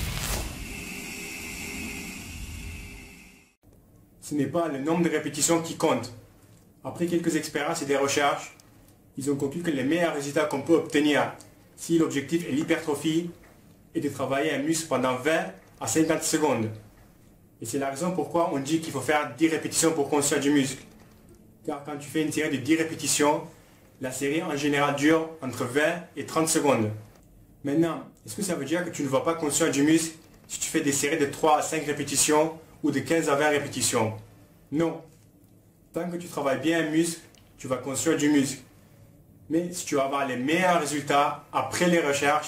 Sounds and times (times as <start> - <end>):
Speech: 4.2 - 6.2, 6.8 - 8.6, 9.2 - 16.8, 17.6 - 20.8, 21.6 - 27.0, 27.6 - 35.1, 35.9 - 38.7, 39.5 - 42.4.